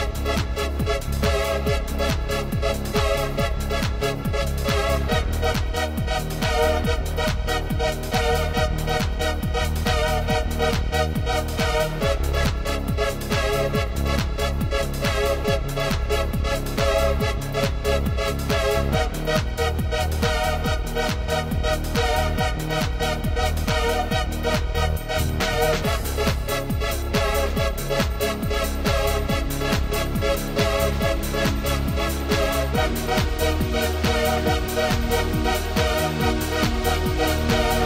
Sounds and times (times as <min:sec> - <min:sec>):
Music: 0:00.0 - 0:37.8.